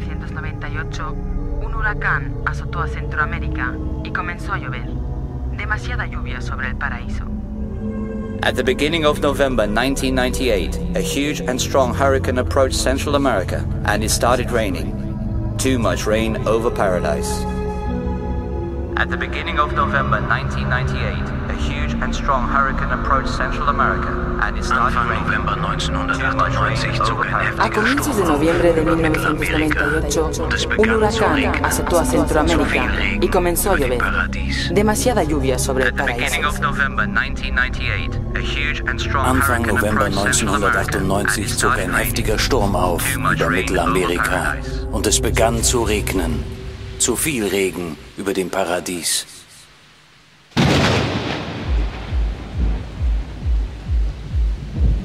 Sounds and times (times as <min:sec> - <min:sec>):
Speech: 0:00.0 - 0:04.9, 0:05.6 - 0:07.3, 0:08.4 - 0:15.0, 0:15.6 - 0:17.5, 0:19.0 - 0:49.6
Music: 0:00.0 - 0:48.4, 0:51.6 - 0:55.0.